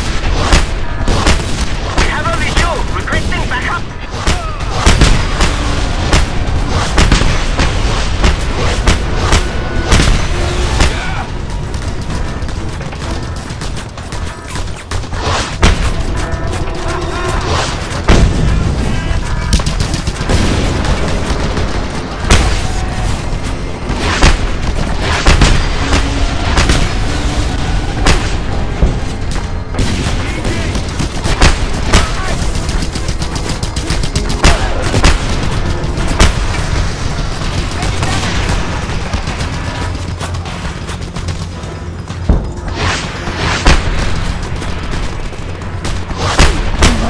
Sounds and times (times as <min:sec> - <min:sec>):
Music: 0:00.0 - 0:47.0.